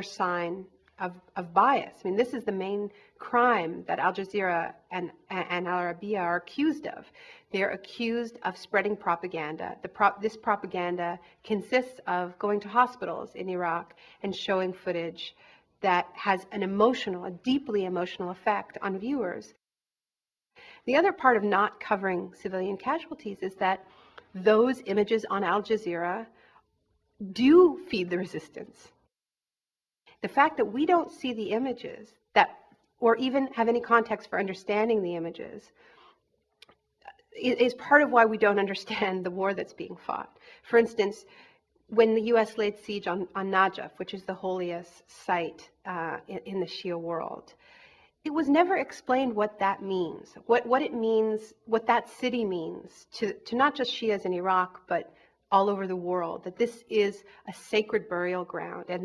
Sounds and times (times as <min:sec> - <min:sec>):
Speech: 0:00.0 - 0:19.6, 0:20.9 - 0:23.8, 0:24.4 - 0:26.3, 0:27.2 - 0:28.9, 0:30.2 - 0:35.7, 0:37.0 - 0:41.3, 0:41.9 - 0:47.6, 0:48.3 - 0:59.0.